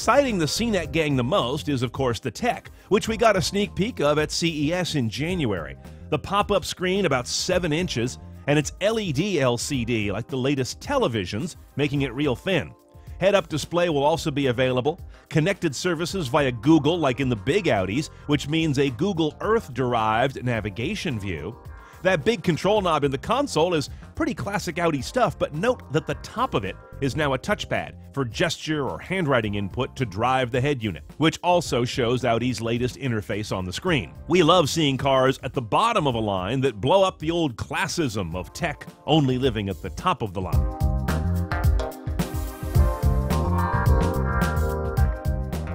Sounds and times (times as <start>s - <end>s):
Speech: 0.0s - 40.6s
Music: 0.0s - 45.7s.